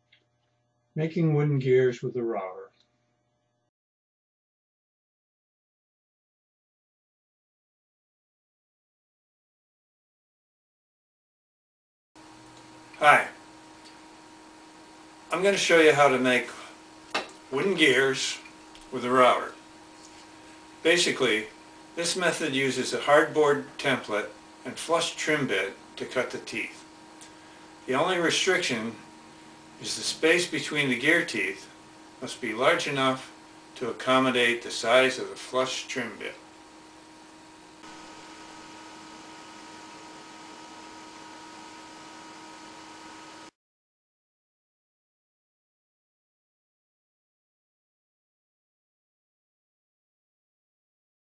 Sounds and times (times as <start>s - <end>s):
Speech: 1.0s - 2.7s, 13.0s - 13.4s, 15.3s - 16.7s, 17.5s - 19.6s, 20.9s - 26.8s, 27.9s - 29.0s, 29.8s - 36.4s.